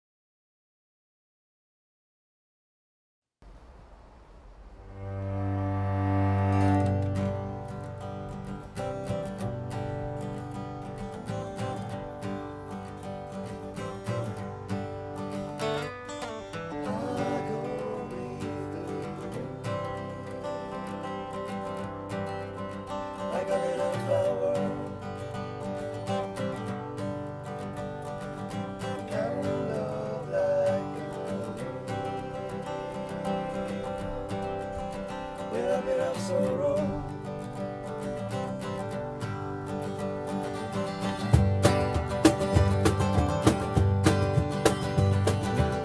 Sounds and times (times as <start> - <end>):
Music: 4.8 - 45.8.